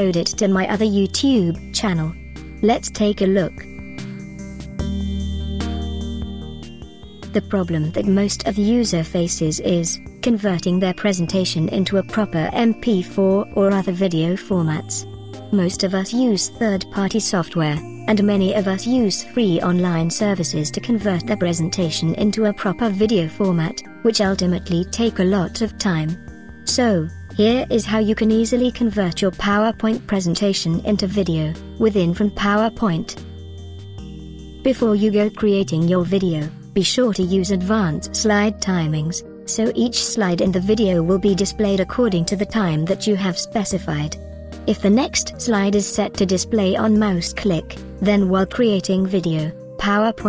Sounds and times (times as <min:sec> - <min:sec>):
Speech synthesizer: 0:00.0 - 0:03.6, 0:07.4 - 0:15.0, 0:15.6 - 0:26.1, 0:26.7 - 0:33.2, 0:34.7 - 0:50.2.